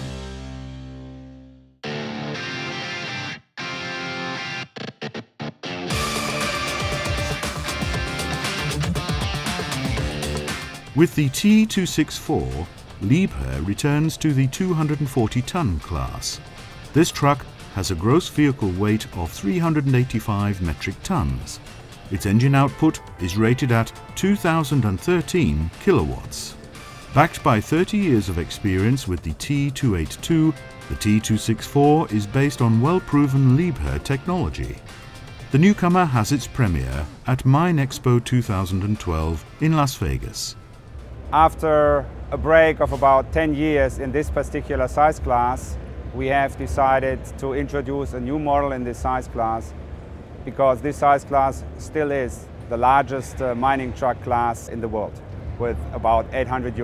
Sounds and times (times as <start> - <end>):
Speech: 11.0 - 16.4, 17.0 - 26.6, 27.2 - 34.8, 35.5 - 40.6, 41.3 - 49.7, 50.5 - 56.8.